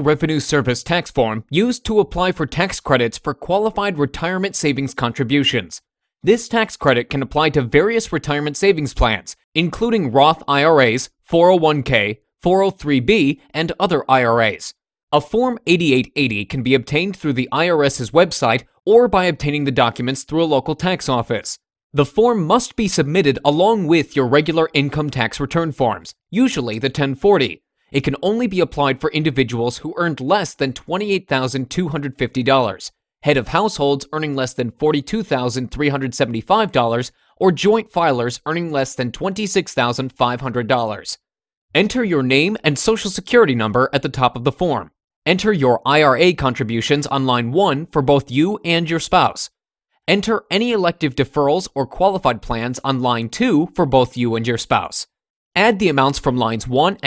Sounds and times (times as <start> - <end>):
Speech: 0.0 - 41.2, 41.8 - 49.5, 50.1 - 57.0.